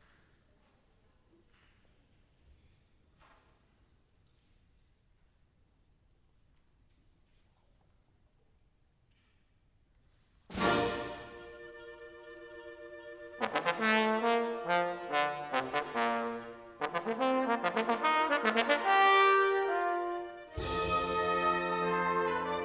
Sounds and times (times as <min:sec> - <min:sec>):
Music: 0:10.5 - 0:22.6.